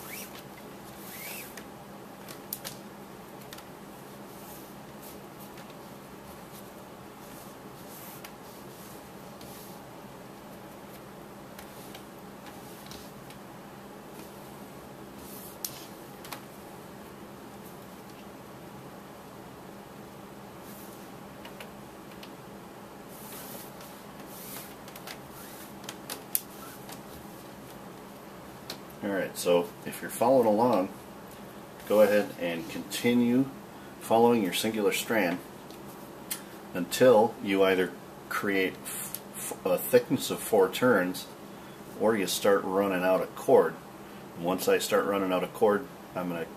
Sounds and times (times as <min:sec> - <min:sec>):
Speech: 0:29.0 - 0:31.0, 0:31.9 - 0:35.4, 0:36.8 - 0:41.4, 0:42.0 - 0:43.8, 0:44.4 - 0:46.5.